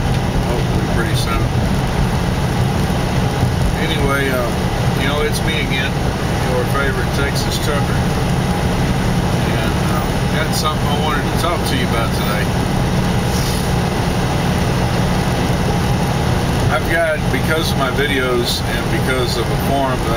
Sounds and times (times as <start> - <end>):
Vehicle: 0.0 - 20.1
Speech: 0.5 - 1.5, 3.8 - 8.0, 9.4 - 12.5, 16.7 - 20.1.